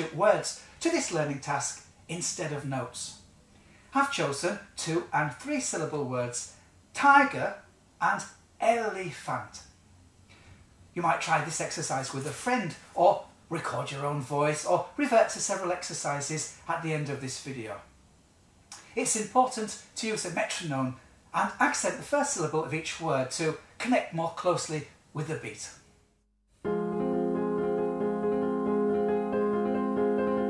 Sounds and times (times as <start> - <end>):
Speech: 0.0 - 3.3, 4.0 - 9.8, 11.0 - 17.9, 18.8 - 25.8.